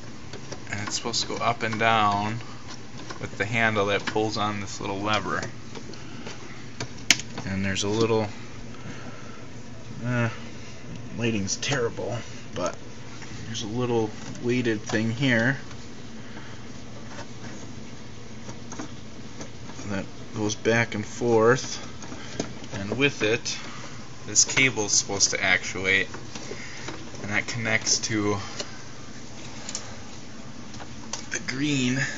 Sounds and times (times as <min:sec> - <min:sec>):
Speech: 0:00.7 - 0:02.4, 0:03.2 - 0:05.5, 0:07.4 - 0:08.4, 0:10.0 - 0:10.4, 0:11.1 - 0:12.8, 0:13.4 - 0:15.6, 0:19.8 - 0:21.9, 0:22.7 - 0:23.7, 0:24.3 - 0:26.1, 0:27.2 - 0:28.5, 0:31.3 - 0:32.1.